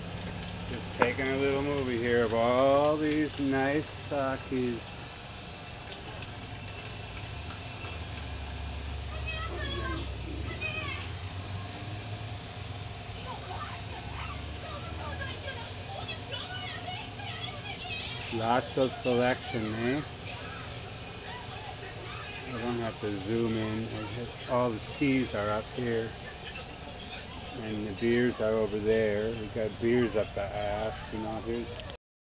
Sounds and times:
Speech: 0:13.2 - 0:20.5, 0:21.2 - 0:32.0.

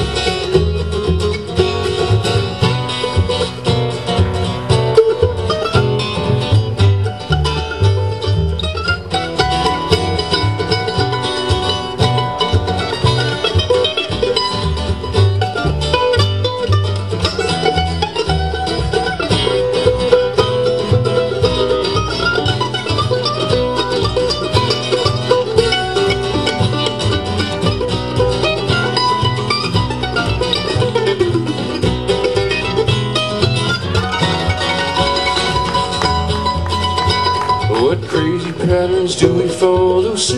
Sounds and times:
Bluegrass: 0:00.0 - 0:40.3
Bowed string instrument: 0:00.0 - 0:40.3
Guitar: 0:00.0 - 0:40.3.

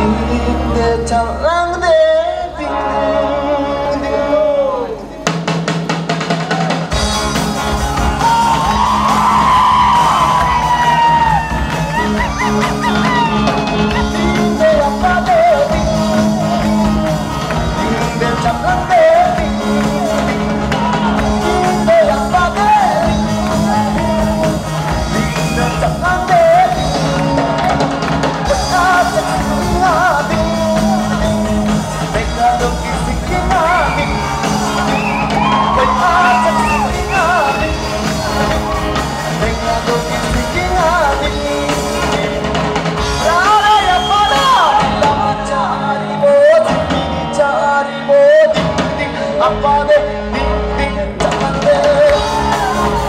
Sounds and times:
Music: 0:00.0 - 0:53.0.

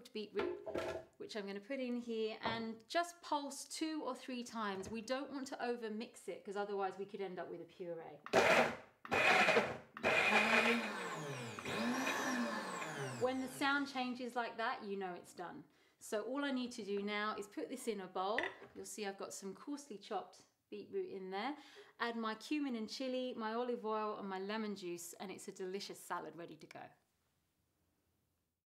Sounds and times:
Speech: 0:00.0 - 0:00.6, 0:01.2 - 0:08.2, 0:13.2 - 0:27.0.

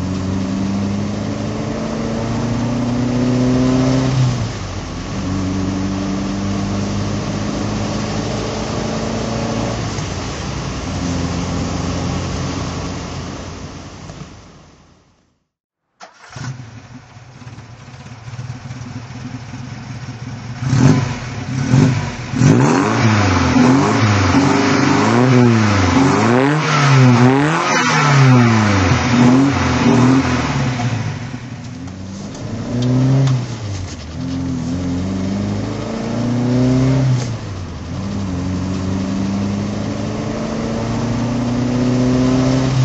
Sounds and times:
Accelerating, revving, vroom: 0:00.0 - 0:04.6, 0:05.2 - 0:10.3, 0:20.6 - 0:31.2, 0:32.3 - 0:33.7, 0:34.3 - 0:42.8
Car: 0:00.0 - 0:42.8
Medium engine (mid frequency): 0:00.0 - 0:42.8.

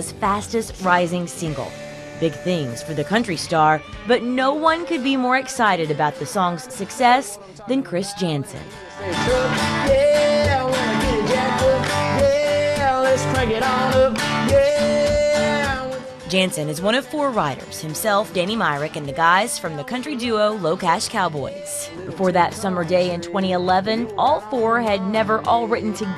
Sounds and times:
Speech: 0:00.0 - 0:08.7, 0:16.3 - 0:26.1
Music: 0:00.0 - 0:26.1.

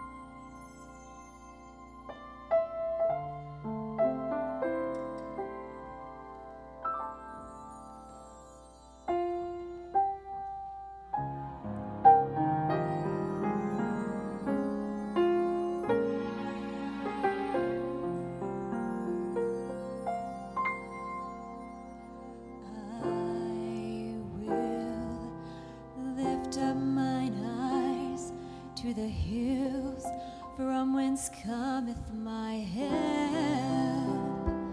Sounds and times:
Music: 0:00.0 - 0:34.7
Female singing: 0:22.6 - 0:25.4, 0:26.0 - 0:34.7.

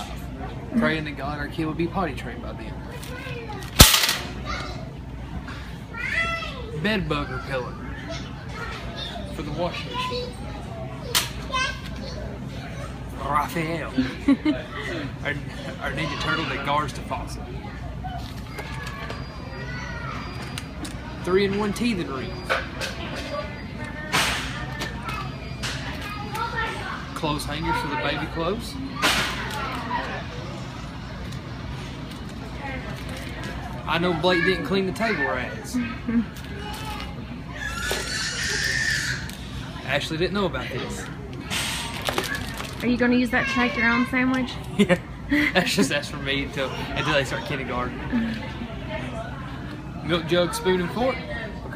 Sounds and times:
Inside, public space: 0:00.0 - 0:51.7.

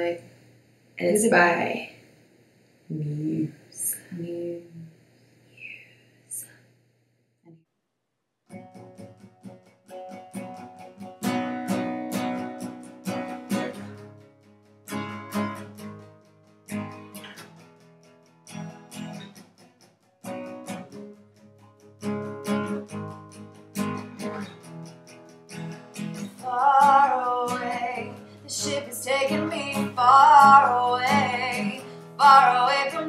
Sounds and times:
Music: 0:08.5 - 0:33.0.

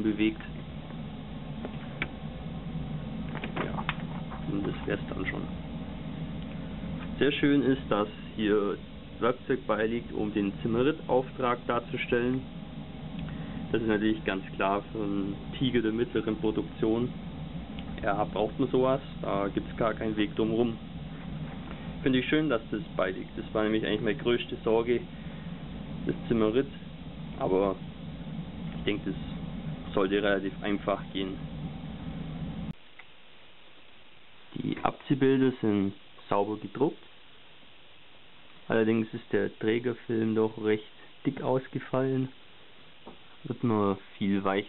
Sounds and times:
Speech: 0:00.0 - 0:00.6, 0:03.5 - 0:05.6, 0:07.2 - 0:12.5, 0:13.7 - 0:17.2, 0:18.0 - 0:20.8, 0:22.0 - 0:25.1, 0:26.0 - 0:26.8, 0:27.4 - 0:27.8, 0:28.8 - 0:31.4, 0:34.5 - 0:37.1, 0:38.7 - 0:42.4, 0:43.4 - 0:44.6
Inside, small room: 0:00.0 - 0:44.6.

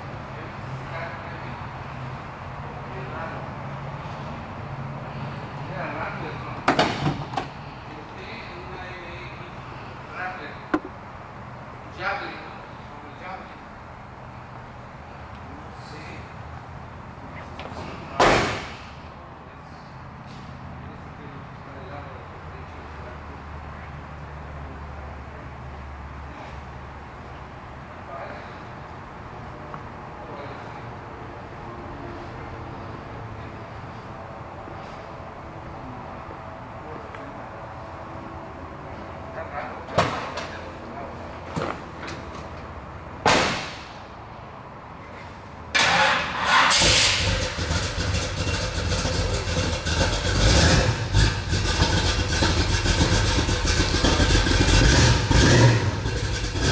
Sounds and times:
Speech: 0:00.3 - 0:01.6, 0:02.6 - 0:03.5, 0:05.7 - 0:06.7, 0:11.9 - 0:13.6, 0:20.8 - 0:23.4, 0:28.0 - 0:28.6, 0:39.3 - 0:41.2.

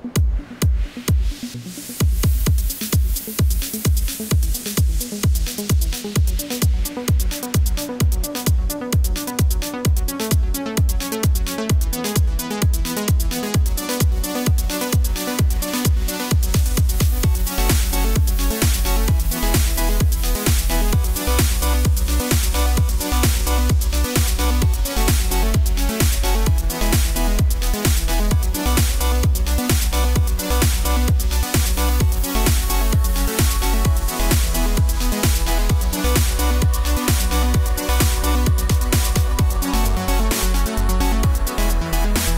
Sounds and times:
Electronic music: 0:00.0 - 0:42.3.

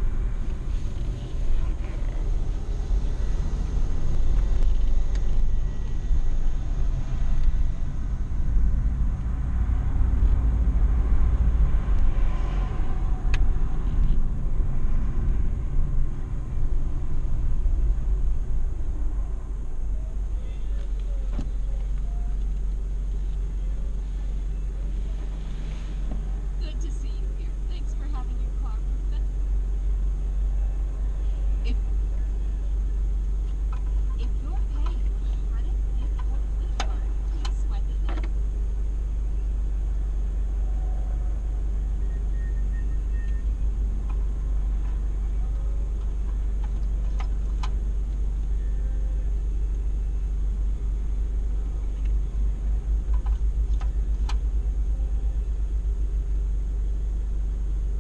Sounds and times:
Car passing by: 0:09.0 - 0:16.5.

